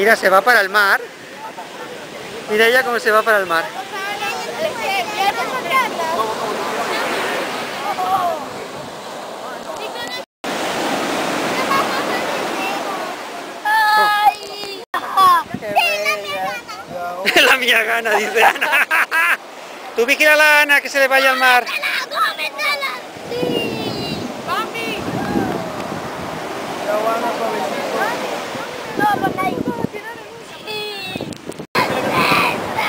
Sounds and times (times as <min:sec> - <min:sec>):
Waves, surf: 0:00.0 - 0:32.8.